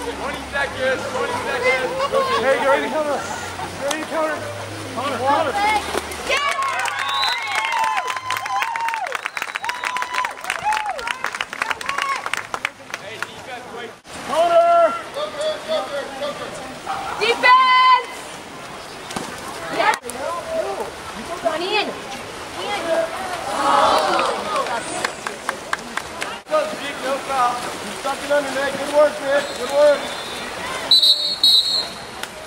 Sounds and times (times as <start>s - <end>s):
Stream: 0.0s - 32.4s.